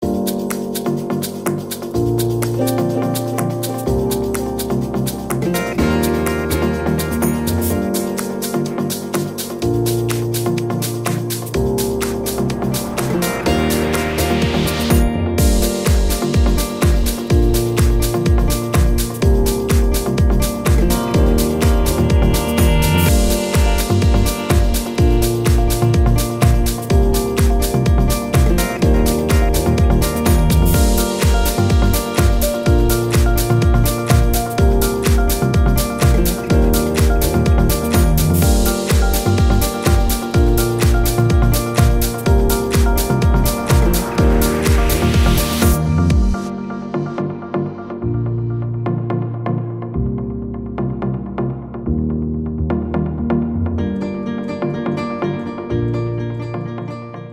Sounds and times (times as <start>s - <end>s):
Music: 0.0s - 57.3s.